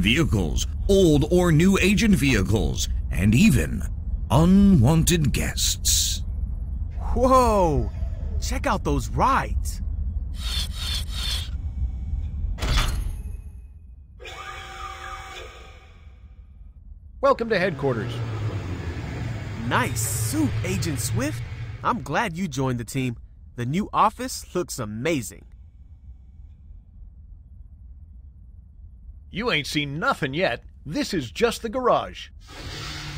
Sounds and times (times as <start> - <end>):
Speech: 0.0 - 6.2, 7.0 - 9.8, 17.2 - 18.3, 19.6 - 25.4, 29.3 - 32.3.